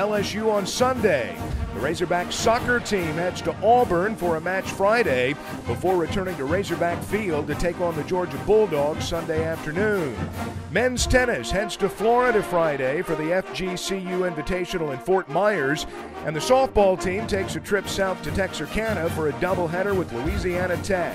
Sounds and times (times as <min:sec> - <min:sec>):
Music: 0:00.0 - 0:21.1
Speech: 0:00.0 - 0:21.1.